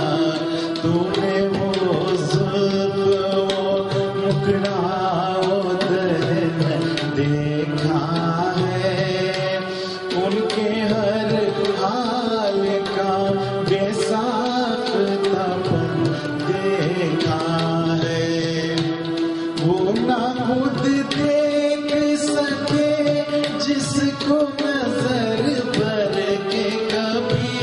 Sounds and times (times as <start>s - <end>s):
Tabla: 0.0s - 27.6s.